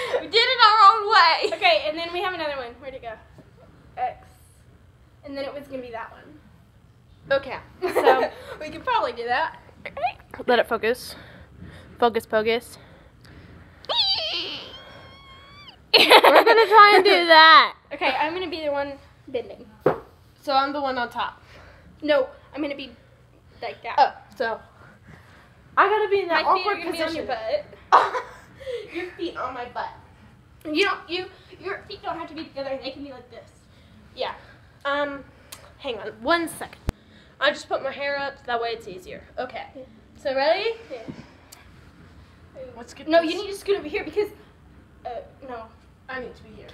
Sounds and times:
Inside, small room: 0.0 - 46.7.

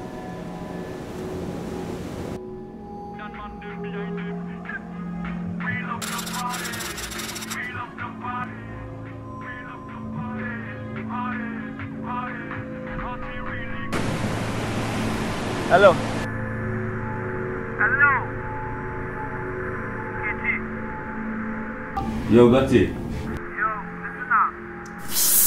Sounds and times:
Speech: 3.2 - 4.8, 15.7 - 16.0, 17.8 - 18.3, 22.2 - 24.6.

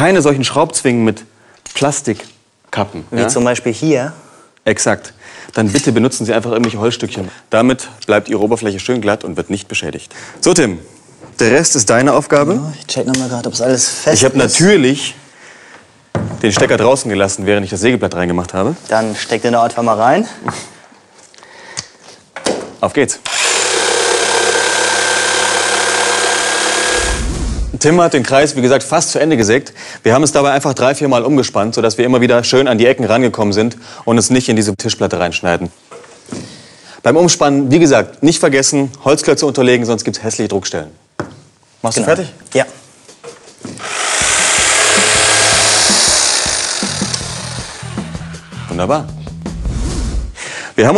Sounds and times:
Drill: 23.2 - 27.7, 43.8 - 48.5.

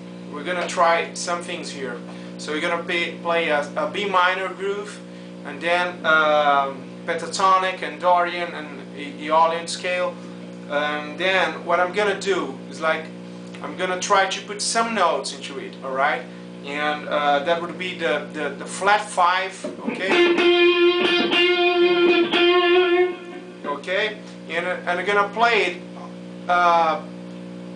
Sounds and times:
Speech: 0.3 - 20.3, 23.6 - 27.1
Music: 19.8 - 23.7.

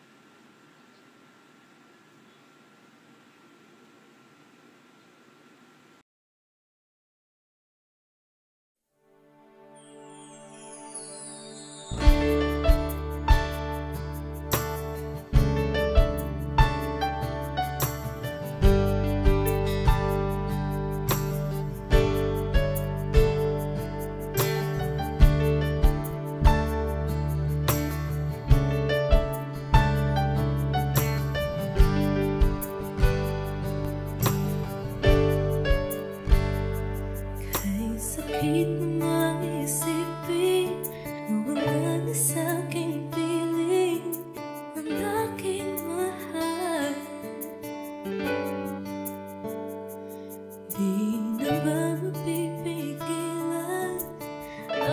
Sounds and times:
New-age music: 9.0 - 54.9.

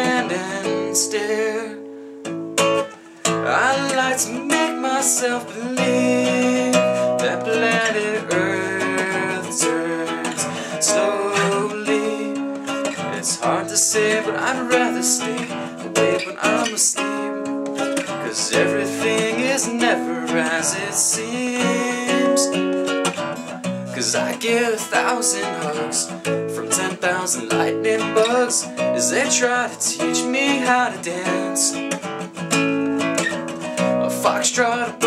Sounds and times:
Music: 0.0 - 35.0.

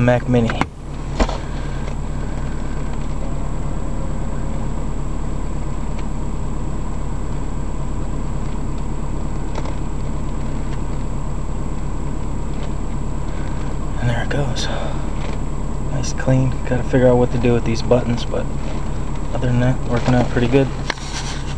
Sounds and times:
Speech: 0.0 - 0.7, 14.0 - 15.0, 15.9 - 18.5, 19.3 - 20.8
Vehicle: 0.0 - 21.5.

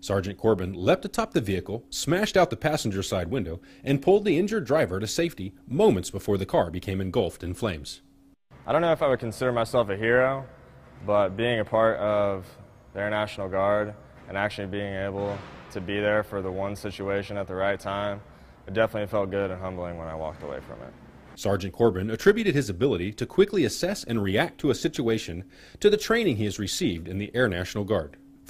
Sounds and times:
Speech: 0.0 - 8.0, 8.6 - 28.2.

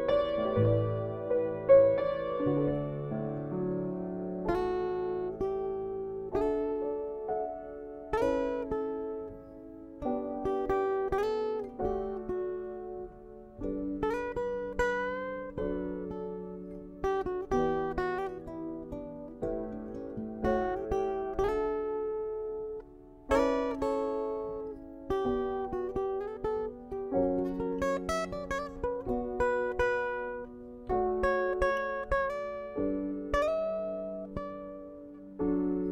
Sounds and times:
Guitar: 0.0 - 35.9.

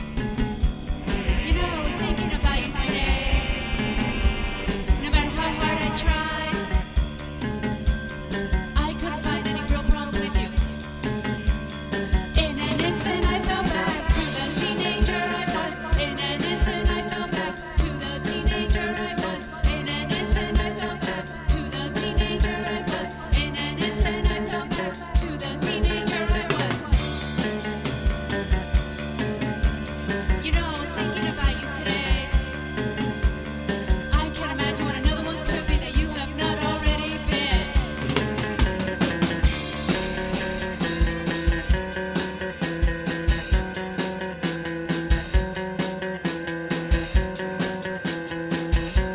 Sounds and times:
Jazz: 0.0 - 49.1.

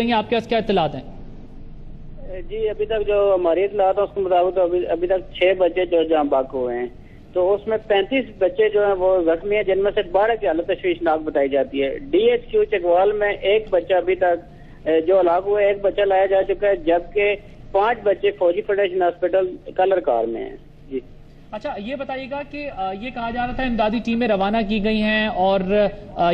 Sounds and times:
Speech: 2.2 - 21.0, 21.6 - 26.3.

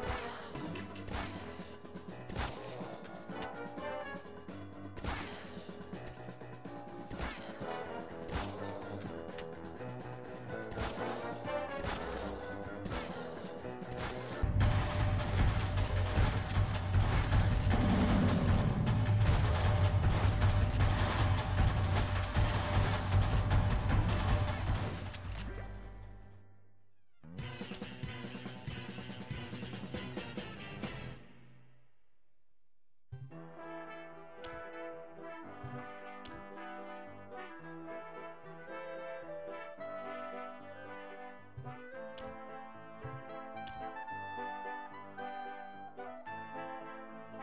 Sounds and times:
Background music: 0.0 - 31.9, 33.1 - 47.4.

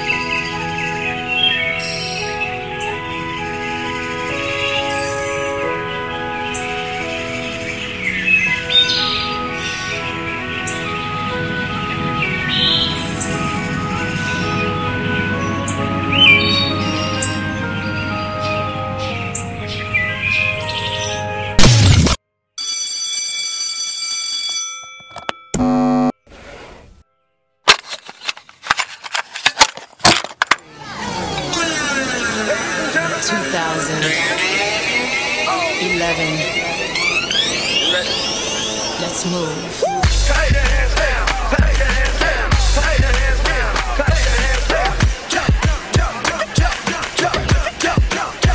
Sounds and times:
Music: 0.0 - 22.2, 31.2 - 48.5.

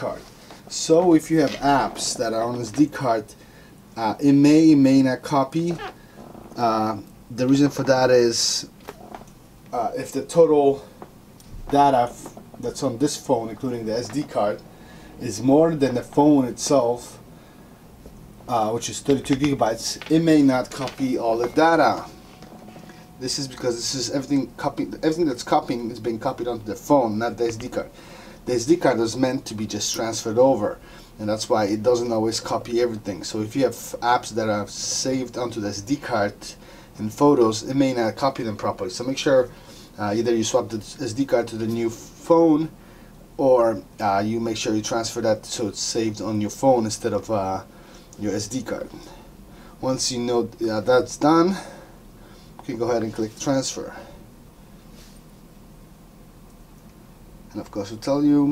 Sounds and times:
Speech: 0.0 - 3.4, 4.0 - 6.0, 6.6 - 9.0, 9.7 - 10.9, 11.5 - 17.3, 18.5 - 22.2, 23.2 - 42.8, 43.4 - 49.2, 49.8 - 51.8, 52.6 - 54.2, 57.5 - 58.5
Inside, small room: 0.0 - 58.5.

